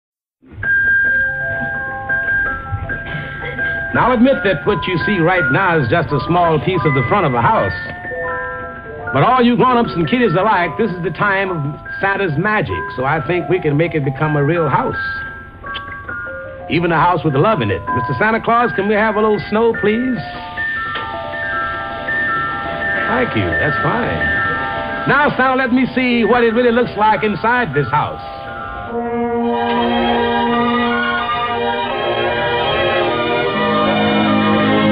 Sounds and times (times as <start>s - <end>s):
Music: 0.4s - 34.9s
Speech: 3.9s - 7.9s, 9.1s - 15.2s, 16.7s - 20.4s, 23.0s - 24.3s, 25.1s - 28.4s.